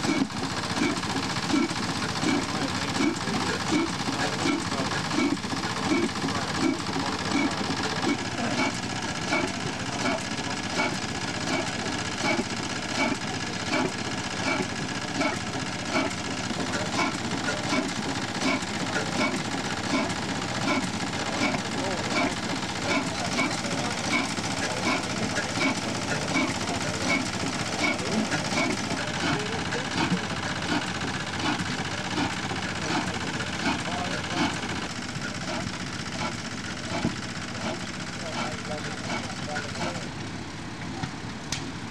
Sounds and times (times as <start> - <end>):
Idling: 0.0 - 41.9
Speech: 0.8 - 8.7, 20.7 - 30.8, 31.4 - 35.6, 37.6 - 40.1.